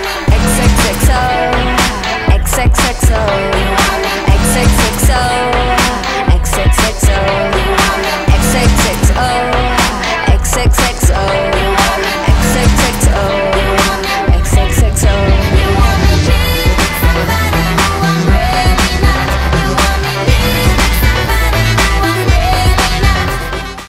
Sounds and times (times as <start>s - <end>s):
Exciting music: 0.0s - 23.8s
Soundtrack music: 0.0s - 23.8s.